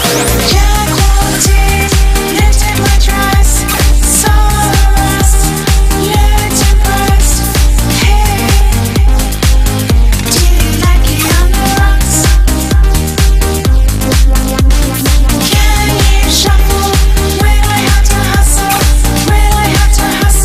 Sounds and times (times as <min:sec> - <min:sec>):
House music: 0:00.0 - 0:20.4.